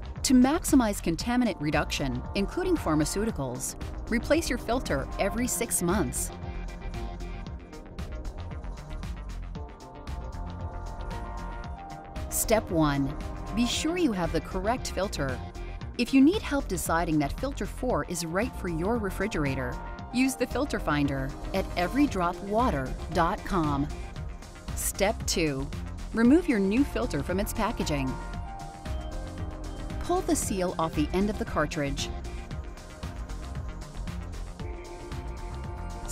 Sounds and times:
Music: 0.0s - 36.1s
Speech: 0.3s - 6.3s, 12.4s - 15.4s, 16.0s - 23.9s, 24.8s - 28.2s, 30.0s - 32.1s.

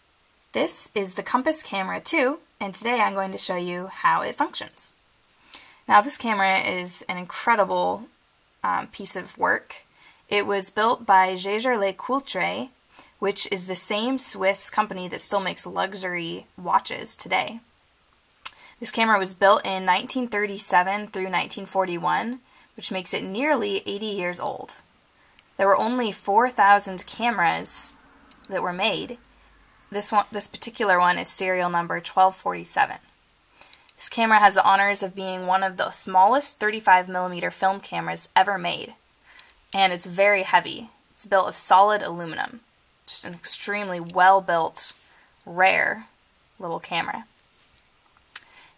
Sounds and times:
Speech: 0.6s - 5.0s, 5.9s - 17.6s, 18.8s - 24.8s, 25.6s - 29.2s, 29.9s - 33.1s, 34.0s - 39.0s, 39.8s - 47.3s.

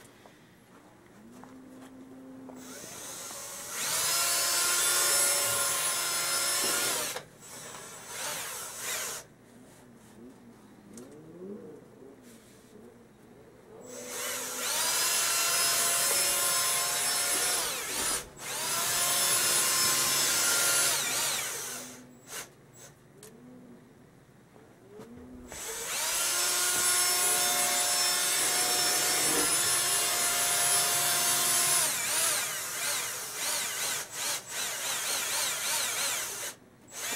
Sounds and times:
Drill: 2.6s - 9.3s, 13.9s - 23.0s, 25.5s - 37.1s.

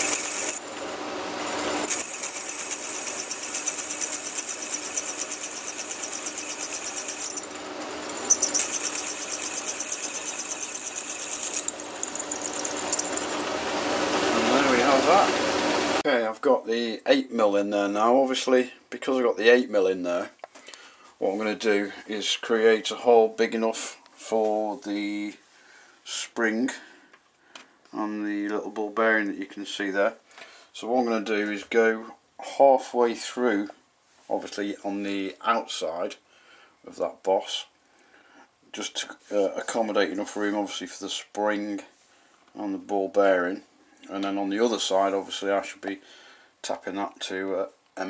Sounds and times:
Tools: 0.0s - 0.9s, 1.5s - 13.5s.

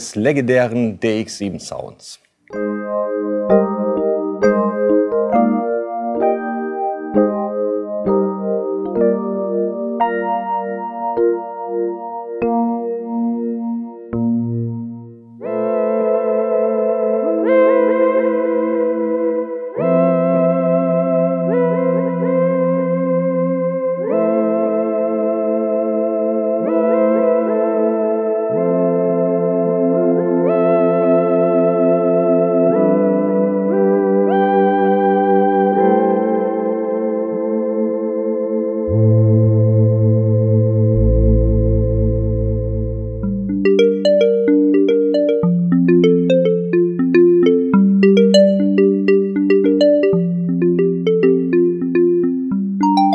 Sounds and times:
Music: 2.5s - 53.1s.

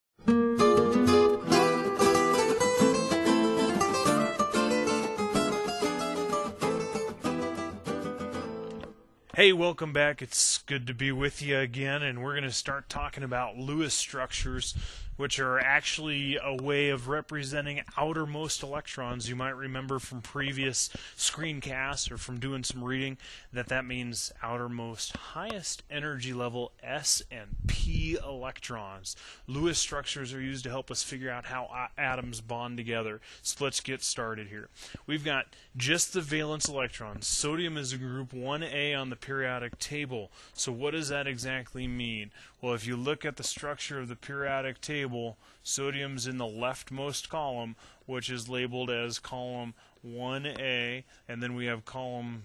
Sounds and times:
Mandolin: 0.3s - 9.0s.

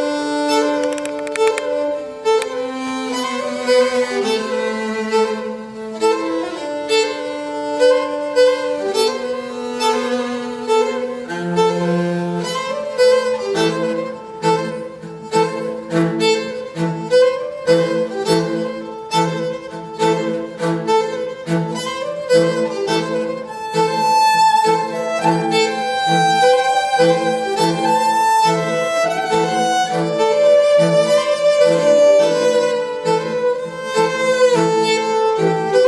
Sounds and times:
Violin, fiddle: 0.0s - 35.8s.

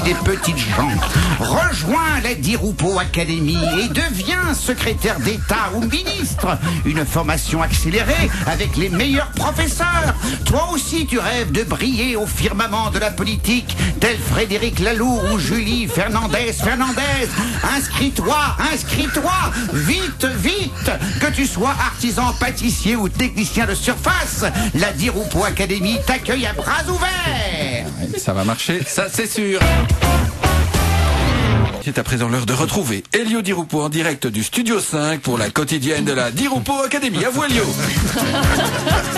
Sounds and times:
Speech: 0.0s - 29.8s, 31.8s - 38.0s
Music: 0.0s - 32.0s, 35.8s - 39.1s.

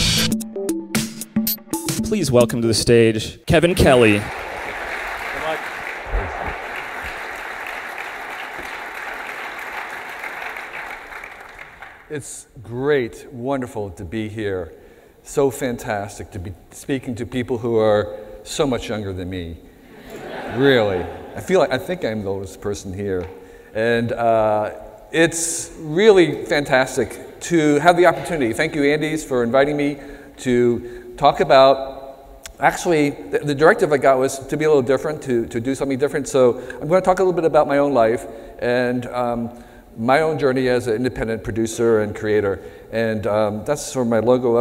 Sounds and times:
Speech: 2.0s - 4.3s, 12.1s - 14.7s, 15.3s - 19.6s, 20.5s - 31.9s, 32.5s - 44.6s.

